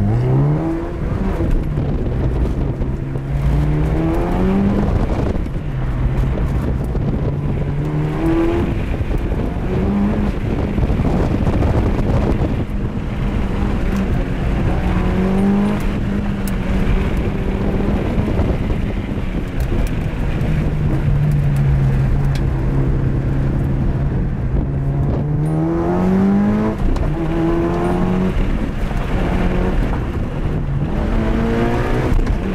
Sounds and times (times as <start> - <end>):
Car: 0.0 - 32.5.